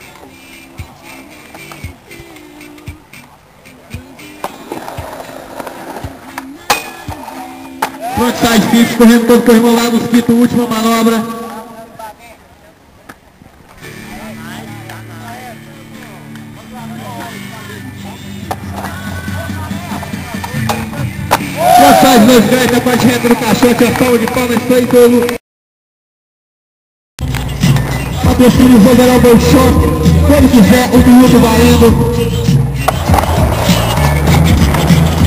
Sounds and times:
Skateboard: 0:00.0 - 0:08.2, 0:18.4 - 0:21.7, 0:32.8 - 0:35.2
Music: 0:00.0 - 0:10.6, 0:13.8 - 0:25.3, 0:27.2 - 0:35.2
Speech: 0:14.1 - 0:18.3, 0:19.1 - 0:21.1, 0:21.8 - 0:25.4, 0:28.2 - 0:32.2.

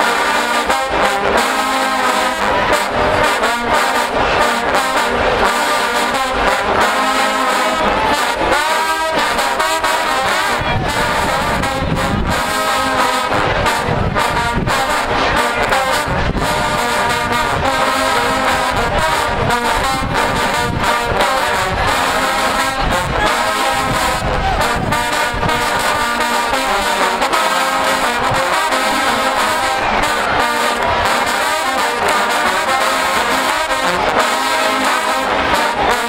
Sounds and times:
Music: 0:00.0 - 0:36.0.

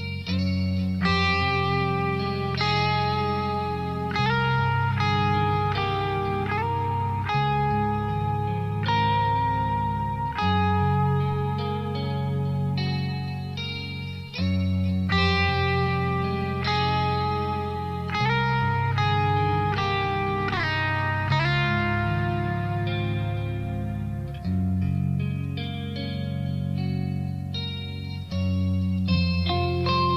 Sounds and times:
Strum: 0:00.0 - 0:30.1.

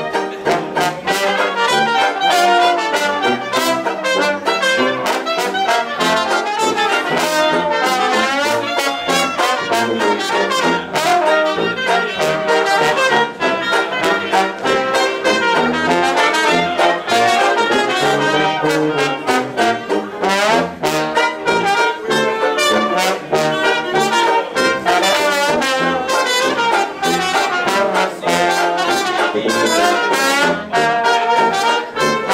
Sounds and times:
Jazz: 0:00.0 - 0:32.3.

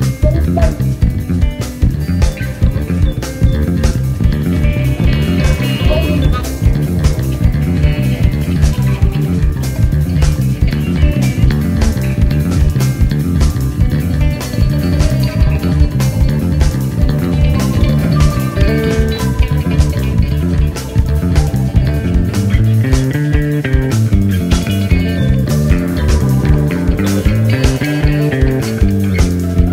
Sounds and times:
Music: 0:00.0 - 0:29.7.

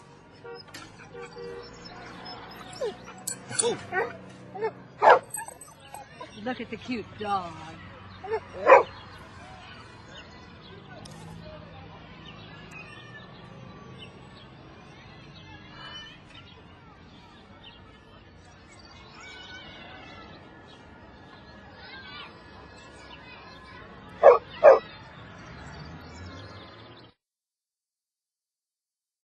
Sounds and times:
Bow-wow: 0:03.6 - 0:05.6, 0:08.3 - 0:08.9, 0:24.2 - 0:24.9.

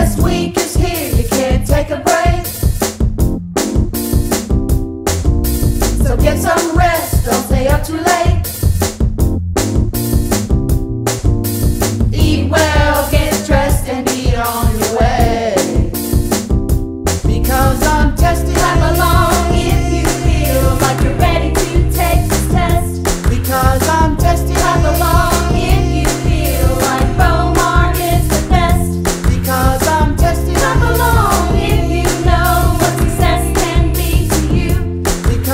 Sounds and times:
Pop music: 0:00.0 - 0:03.0, 0:05.4 - 0:08.9, 0:11.7 - 0:16.5, 0:17.2 - 0:35.5
Happy music: 0:00.0 - 0:35.5.

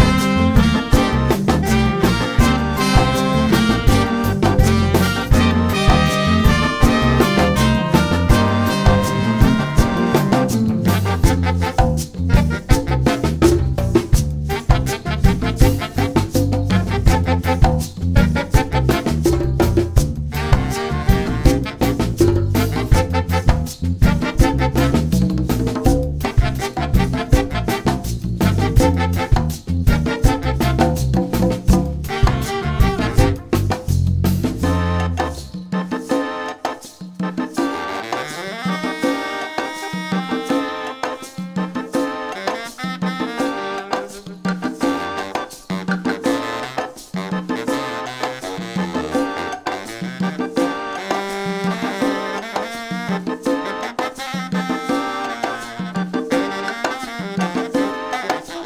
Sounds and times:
Drum: 0:00.0 - 0:53.6
Drum kit: 0:00.0 - 0:58.6.

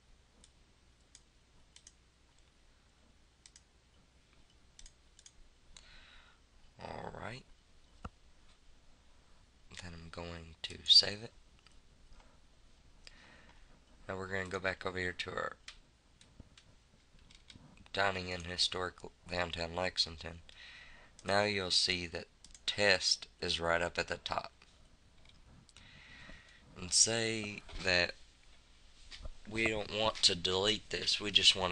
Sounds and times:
Clicking: 0:00.4 - 0:02.5, 0:03.4 - 0:03.7, 0:04.3 - 0:05.9, 0:22.4 - 0:22.6
Speech: 0:06.8 - 0:07.5, 0:09.7 - 0:11.4, 0:14.1 - 0:15.6, 0:17.9 - 0:20.4, 0:21.2 - 0:24.6, 0:26.8 - 0:28.2, 0:29.5 - 0:31.7.

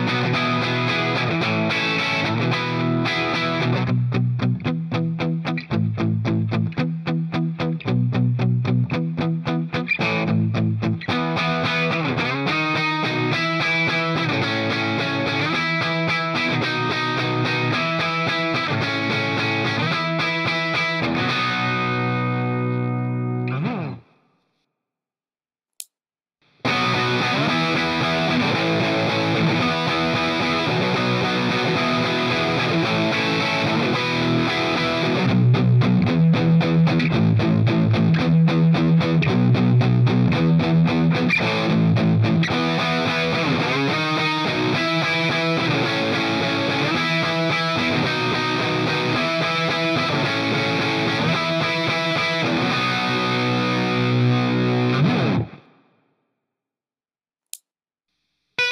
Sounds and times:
Music: 0:00.0 - 0:24.3, 0:26.5 - 0:55.8.

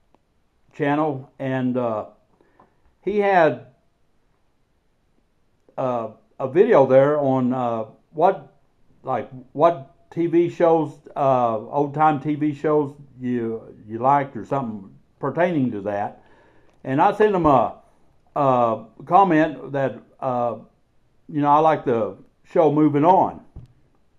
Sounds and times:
Speech: 0:00.8 - 0:02.1, 0:03.1 - 0:03.7, 0:05.8 - 0:08.5, 0:09.1 - 0:16.2, 0:16.8 - 0:17.8, 0:18.4 - 0:20.7, 0:21.3 - 0:23.6.

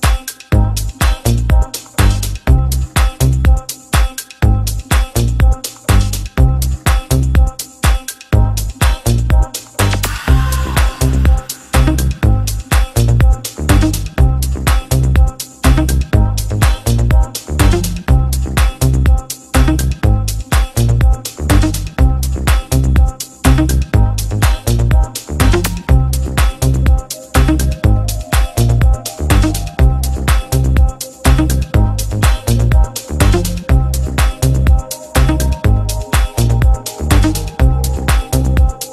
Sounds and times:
House music: 0:00.0 - 0:38.9.

